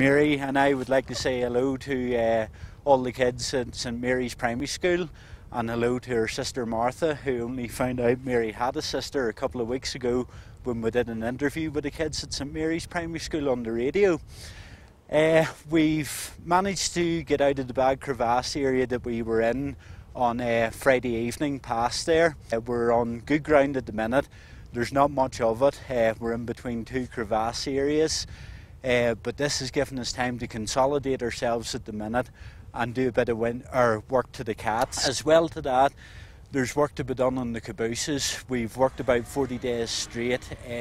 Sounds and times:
Speech: 0.0s - 14.2s, 15.1s - 40.8s.

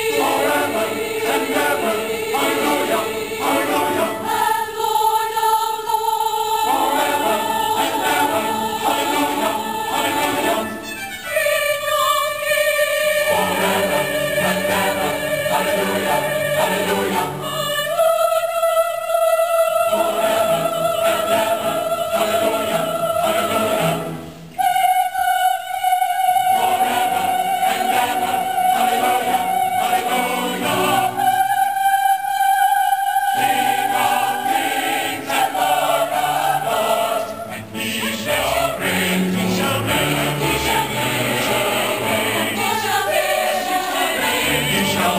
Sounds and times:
Choir: 0.0s - 45.1s
Christmas music: 0.0s - 45.1s.

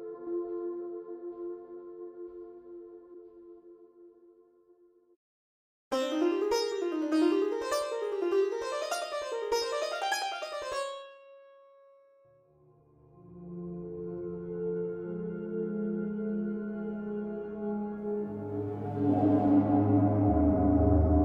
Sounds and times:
Music: 0.0s - 5.2s, 5.9s - 21.2s.

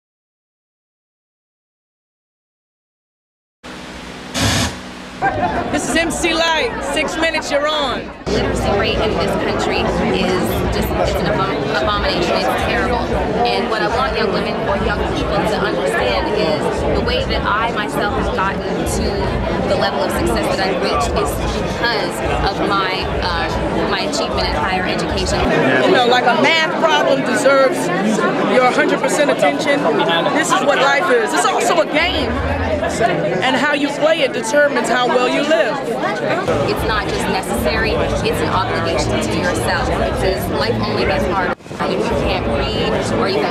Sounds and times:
Speech: 5.2s - 43.5s.

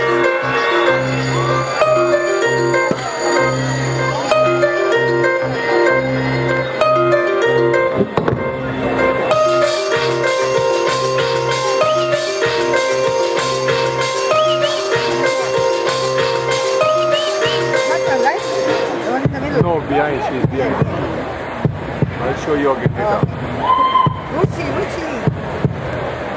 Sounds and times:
Music: 0.0s - 26.3s.

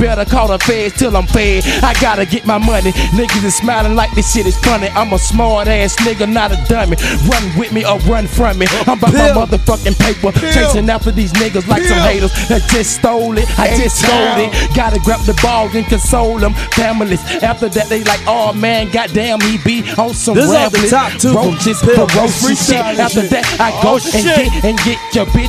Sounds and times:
Hip hop music: 0.0s - 25.4s
Rapping: 0.0s - 25.4s.

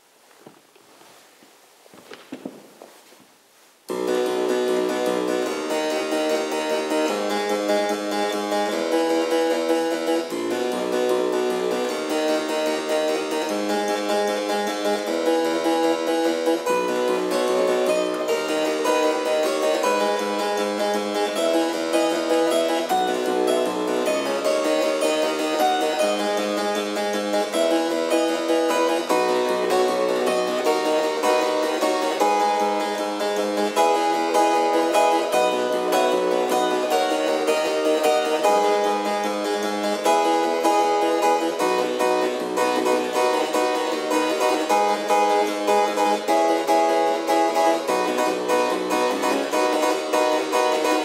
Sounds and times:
Harpsichord: 3.9s - 51.0s.

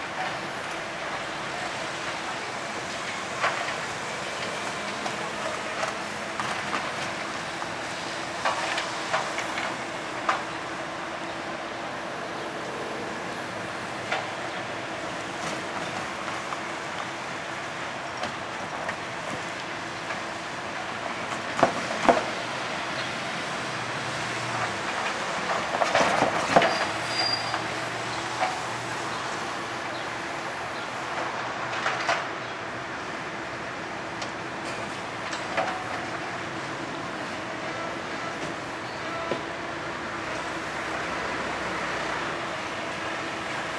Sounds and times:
Outside, rural or natural: 0.0s - 43.7s
Railroad car, train wagon: 0.0s - 43.7s
Train: 0.0s - 43.7s.

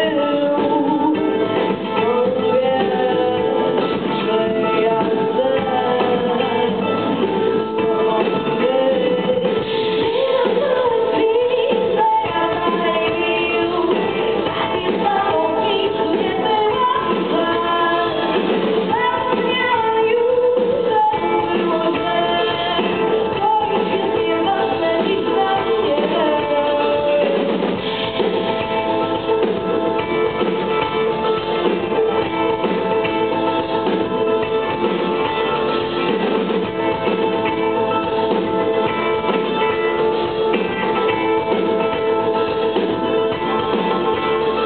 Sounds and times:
Music: 0.0s - 44.6s.

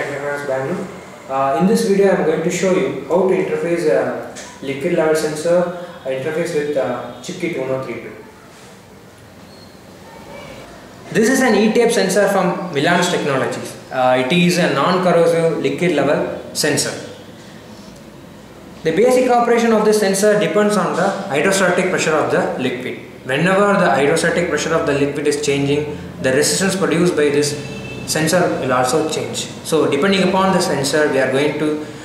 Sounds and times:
Speech: 0.0s - 8.2s, 10.1s - 17.1s, 18.8s - 31.8s.

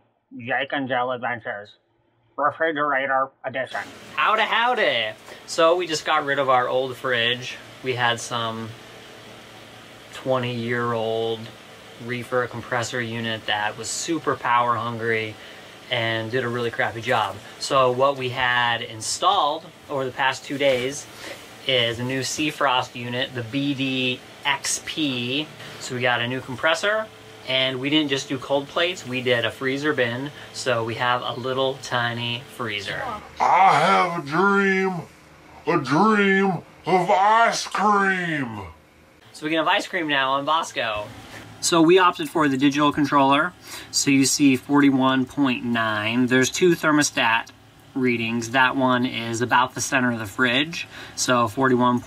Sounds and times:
Speech: 0.4s - 1.8s, 2.4s - 8.8s, 10.1s - 35.1s, 35.7s - 52.0s.

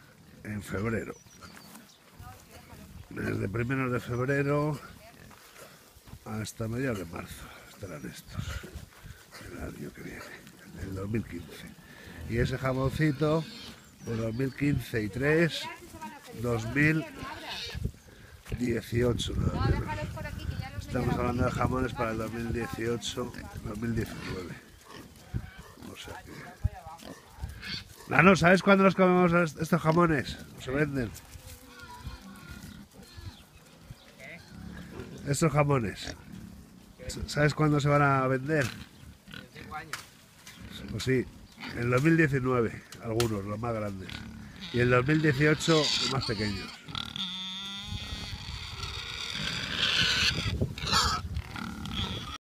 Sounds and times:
Speech: 2.2s - 5.2s, 18.5s - 24.6s, 25.8s - 27.2s, 28.1s - 32.0s, 40.7s - 46.7s
Pig: 11.4s - 14.5s, 16.9s - 17.8s, 23.2s - 28.6s, 29.9s - 35.3s, 40.4s - 42.0s, 44.0s - 52.4s.

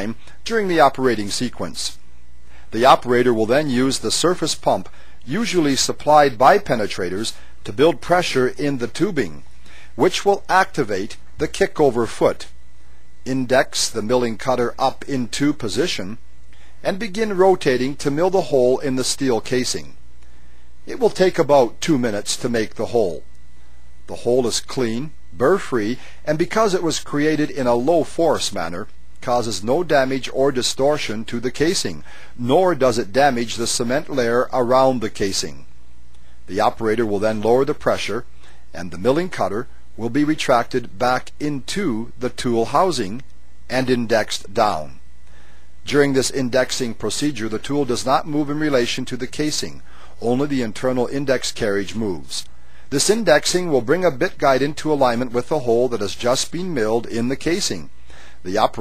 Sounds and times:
Speech: 0.0s - 2.0s, 2.7s - 9.4s, 10.0s - 12.6s, 13.3s - 16.2s, 16.8s - 20.0s, 20.9s - 23.2s, 24.1s - 35.7s, 36.5s - 45.0s, 45.8s - 58.8s.

